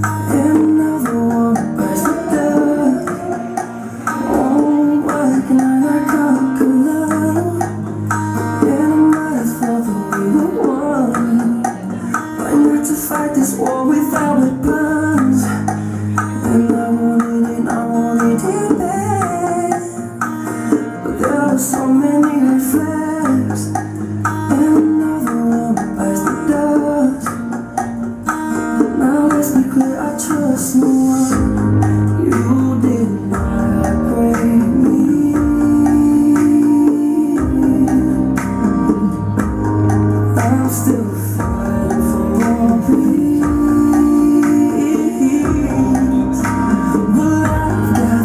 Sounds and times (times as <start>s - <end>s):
Dance music: 0.0s - 48.2s.